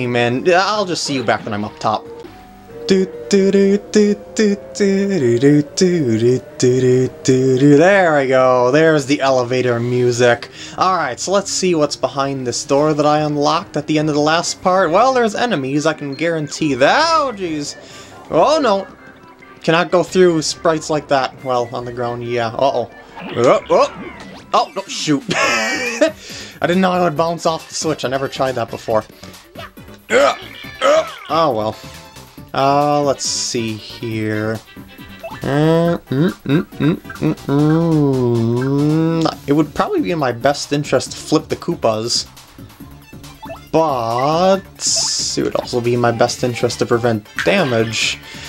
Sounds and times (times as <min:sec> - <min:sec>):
Speech: 0:00.0 - 0:02.0, 0:02.9 - 0:18.9, 0:19.6 - 0:24.0, 0:24.6 - 0:25.4, 0:26.6 - 0:29.1, 0:31.1 - 0:31.8, 0:32.6 - 0:34.6, 0:35.4 - 0:42.3, 0:43.7 - 0:48.2
Music: 0:00.0 - 0:48.4.